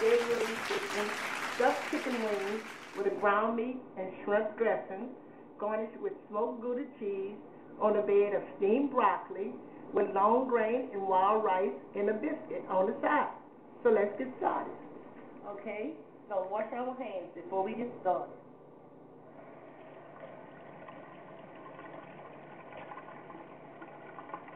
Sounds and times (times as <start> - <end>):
Speech: 0.0 - 14.8, 15.4 - 18.4.